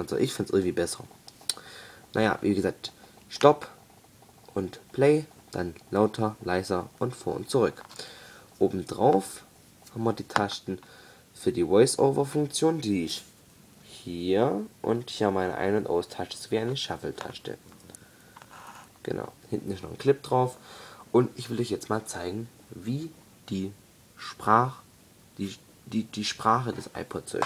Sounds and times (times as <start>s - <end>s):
Speech: 0.0s - 1.1s, 2.1s - 3.8s, 4.5s - 7.8s, 8.6s - 10.8s, 11.4s - 13.3s, 13.9s - 17.6s, 19.0s - 27.4s.